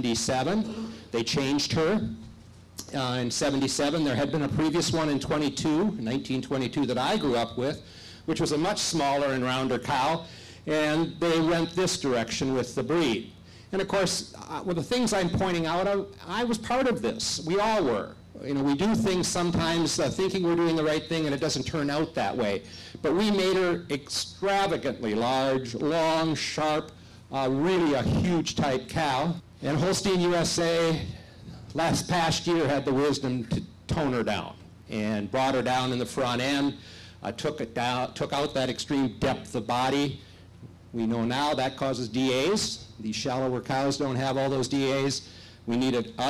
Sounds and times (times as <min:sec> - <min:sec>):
Speech: 0:00.0 - 0:02.2, 0:02.8 - 0:40.2, 0:40.9 - 0:46.2.